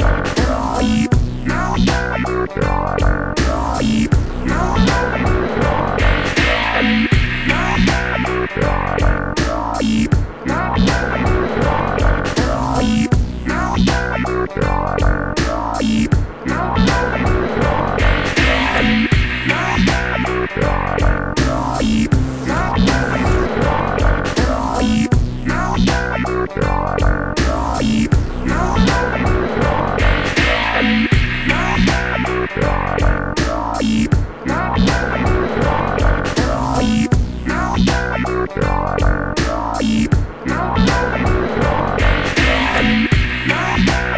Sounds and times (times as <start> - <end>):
Trance music: 0.0 - 38.2, 39.3 - 44.1.